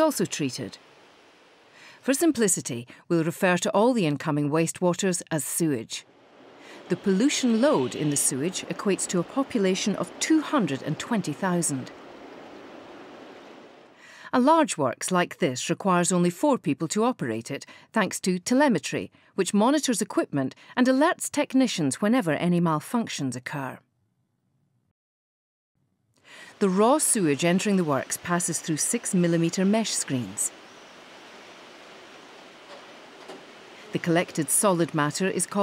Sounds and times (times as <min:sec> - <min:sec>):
Speech: 0:00.0 - 0:00.8, 0:02.0 - 0:06.0, 0:06.8 - 0:11.9, 0:14.2 - 0:23.8, 0:26.6 - 0:30.5, 0:33.9 - 0:35.6.